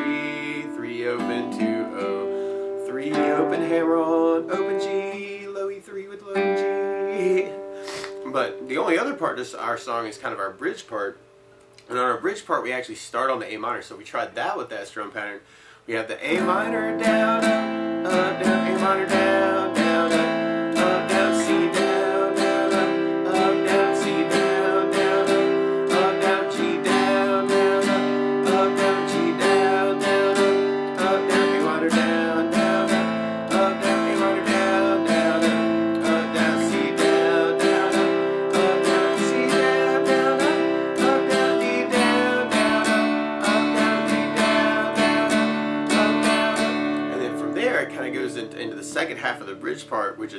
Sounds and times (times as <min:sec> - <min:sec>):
Speech: 0:08.2 - 0:11.2, 0:11.9 - 0:17.0, 0:47.1 - 0:50.3
Strum: 0:16.2 - 0:50.3.